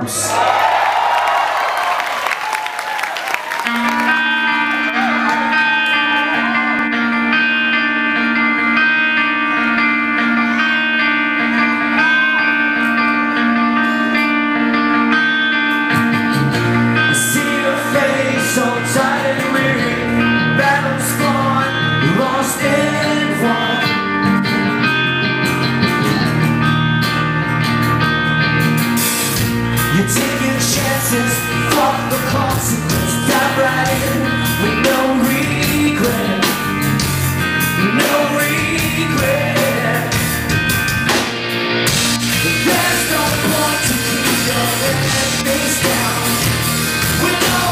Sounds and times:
Rhythm and blues: 1.3s - 47.7s
Independent music: 2.5s - 47.7s.

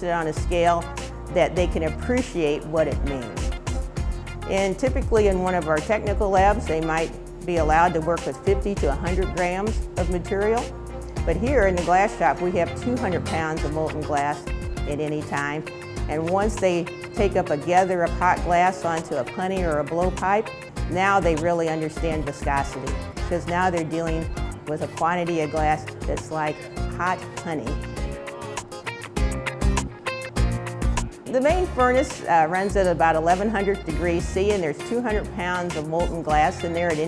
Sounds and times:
Music: 0.0s - 37.0s
Speech: 4.5s - 10.7s, 11.3s - 20.4s, 21.0s - 27.8s, 31.3s - 37.0s.

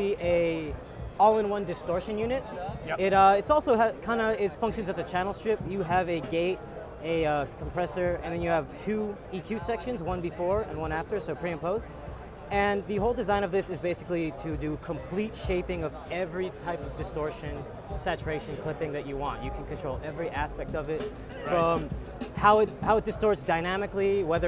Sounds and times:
Speech: 0.0s - 11.8s, 12.5s - 24.4s.

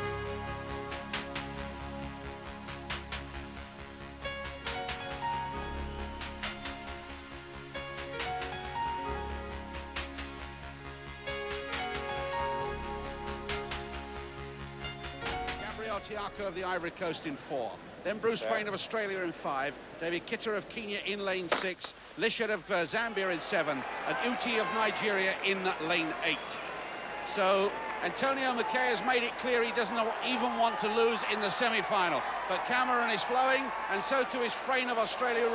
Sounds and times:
Speech: 15.6s - 26.6s, 27.3s - 35.5s.

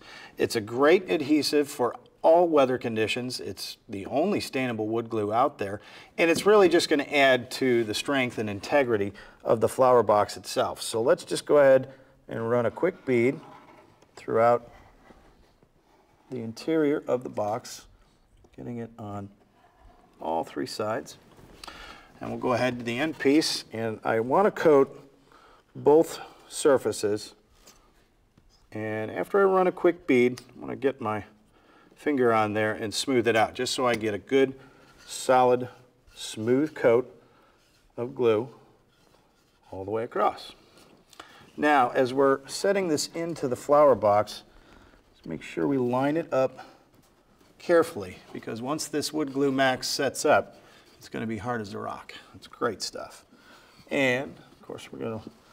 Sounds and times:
Speech: 0.4s - 13.6s, 14.2s - 14.7s, 16.3s - 17.9s, 18.5s - 19.4s, 20.2s - 21.2s, 22.2s - 25.1s, 25.8s - 27.4s, 28.7s - 31.4s, 32.0s - 37.2s, 38.0s - 38.7s, 39.7s - 40.6s, 41.6s - 44.5s, 45.2s - 46.8s, 47.6s - 53.3s, 53.9s - 55.4s.

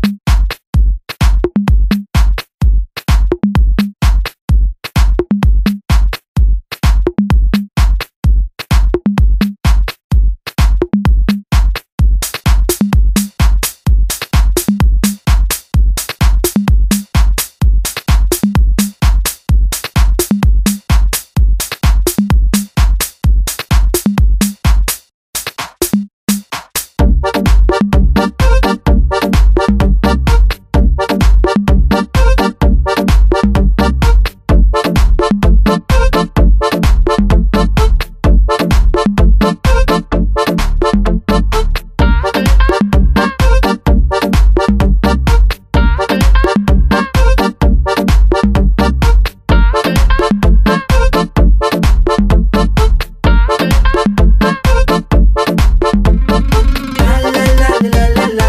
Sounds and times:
Music: 0.0s - 58.4s.

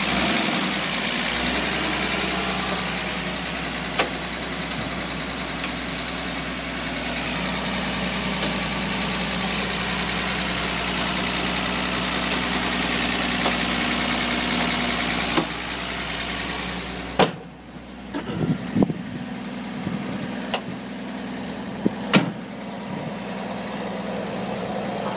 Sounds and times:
Idling: 0.0s - 25.1s
Medium engine (mid frequency): 0.0s - 25.1s.

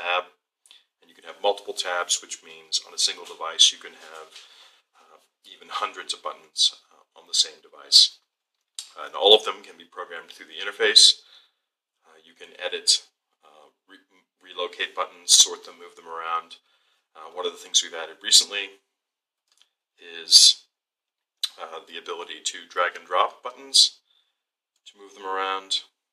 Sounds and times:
Male speech, man speaking: 0.0s - 0.3s, 1.0s - 8.2s, 8.8s - 11.3s, 12.1s - 16.6s, 17.2s - 18.8s, 20.0s - 20.6s, 21.4s - 24.0s, 24.9s - 26.0s
Narration, monologue: 0.0s - 26.1s.

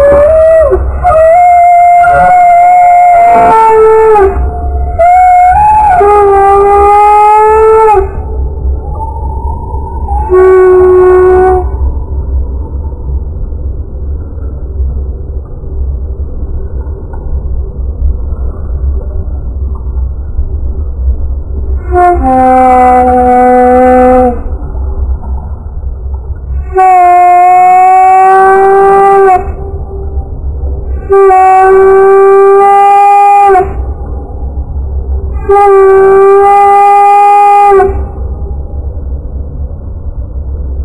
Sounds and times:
Animal: 0.0s - 11.8s.

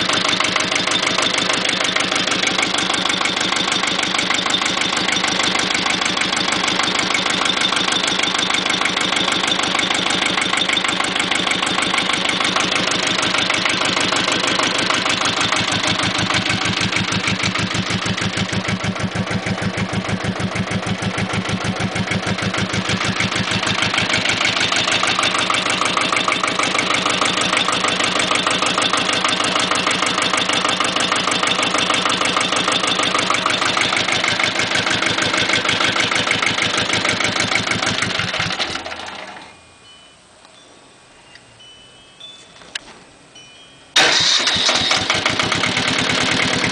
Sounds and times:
Engine knocking: 0.0s - 39.5s, 44.0s - 46.7s.

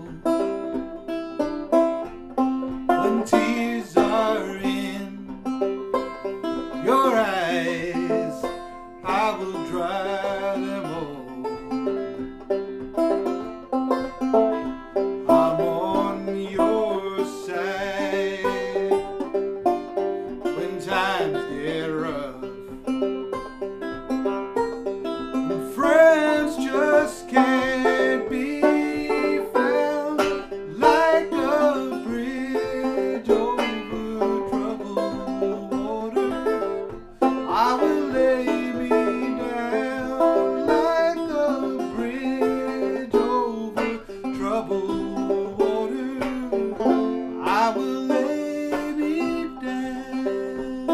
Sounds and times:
Banjo: 0.0s - 50.9s
Bluegrass: 0.0s - 50.9s
Guitar: 0.0s - 50.9s.

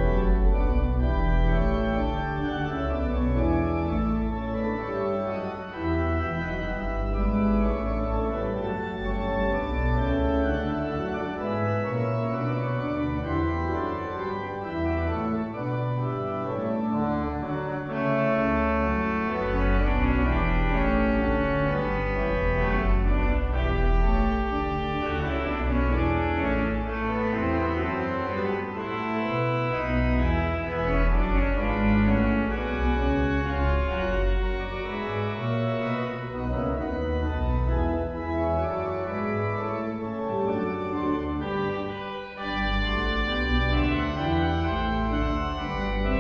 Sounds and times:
Hammond organ: 0.0s - 46.2s.

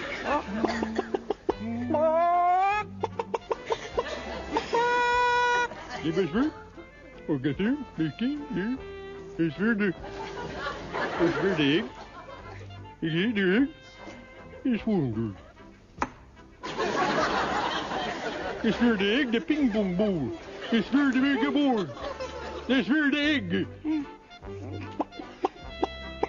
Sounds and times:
Music: 0.0s - 26.2s
Speech: 7.3s - 8.8s, 11.2s - 11.9s, 12.5s - 13.8s, 14.6s - 15.4s, 18.6s - 22.0s, 22.7s - 23.7s.

